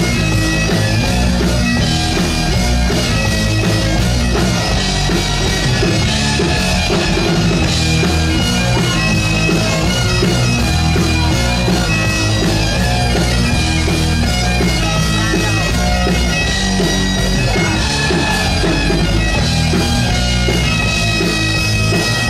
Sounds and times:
Bagpipes: 0.0s - 22.3s
Rock music: 0.0s - 22.3s.

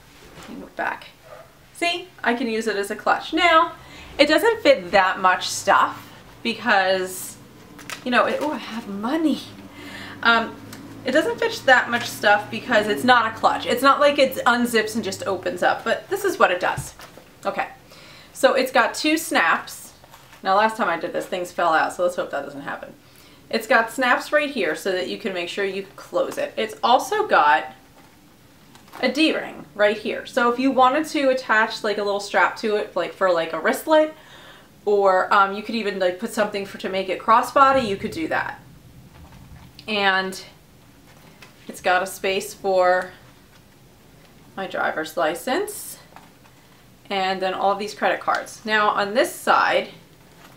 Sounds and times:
Inside, small room: 0.0s - 50.5s
Speech: 0.4s - 1.2s, 1.8s - 7.4s, 8.0s - 9.6s, 10.2s - 17.8s, 18.4s - 27.8s, 29.0s - 34.2s, 34.8s - 38.6s, 39.8s - 40.6s, 41.7s - 43.2s, 44.6s - 46.1s, 47.1s - 50.0s.

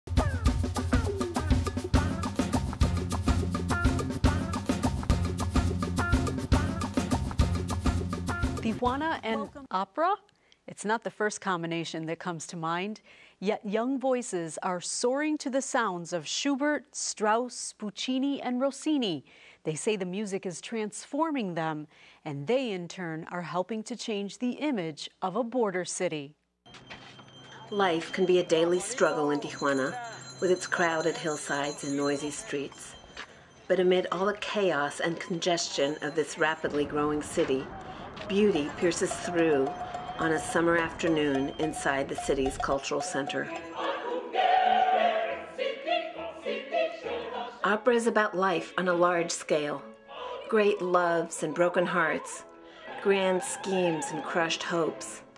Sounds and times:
Music: 0.1s - 9.6s, 35.0s - 55.3s
Speech: 8.6s - 26.4s, 27.7s - 33.0s, 33.7s - 43.6s, 50.5s - 52.4s, 53.0s - 55.2s.

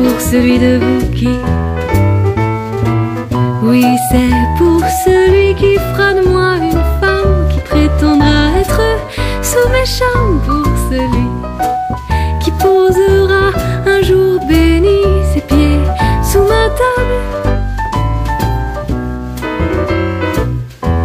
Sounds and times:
Music: 0.0s - 21.0s.

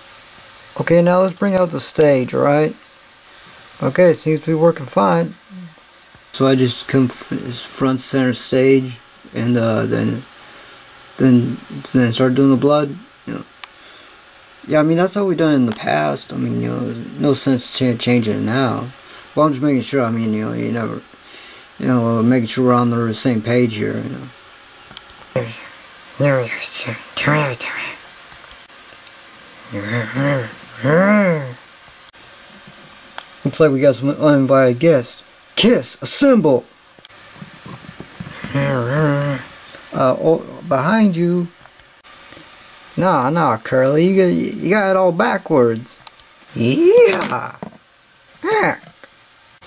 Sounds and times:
Speech: 0.8s - 2.8s, 3.8s - 10.3s, 11.2s - 13.5s, 14.6s - 21.1s, 21.8s - 24.4s, 25.4s - 28.0s, 29.7s - 31.6s, 33.4s - 36.7s, 38.5s - 41.6s, 43.0s - 47.7s, 48.4s - 48.9s.

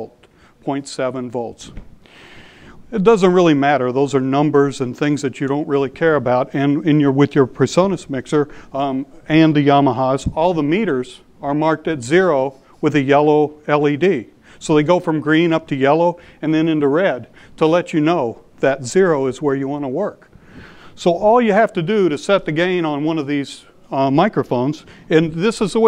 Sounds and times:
Speech: 0.0s - 1.8s, 2.9s - 20.3s, 21.0s - 25.8s.

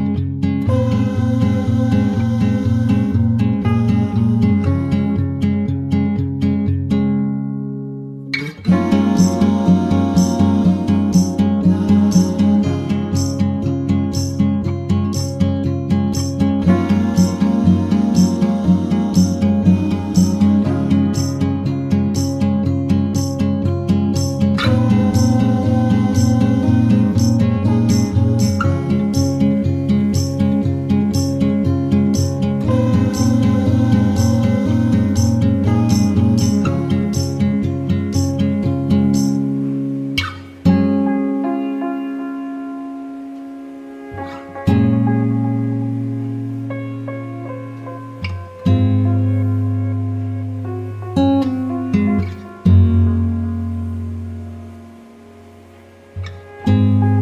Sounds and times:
Music: 0.0s - 57.2s.

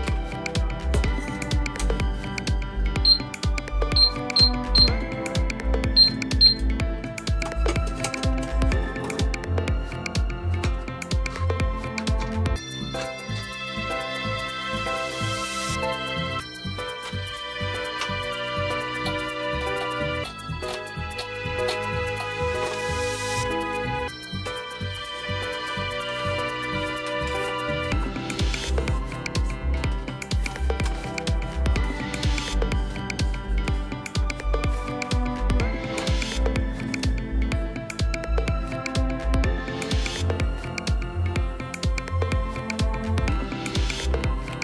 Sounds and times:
Music: 0.0s - 44.6s.

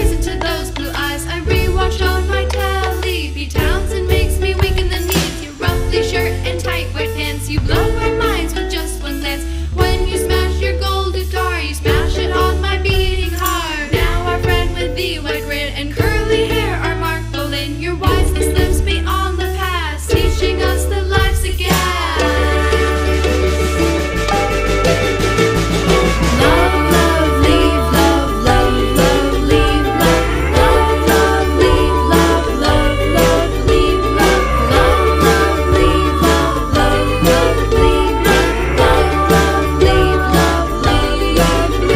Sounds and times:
Tender music: 20.2s - 41.9s.

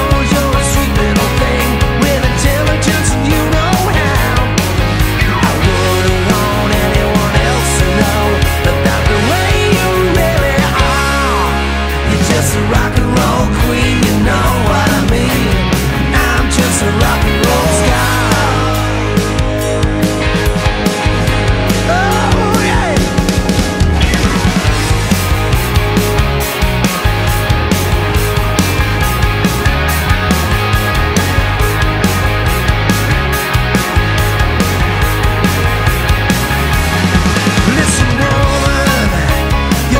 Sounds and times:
Rock and roll: 0.0s - 40.0s.

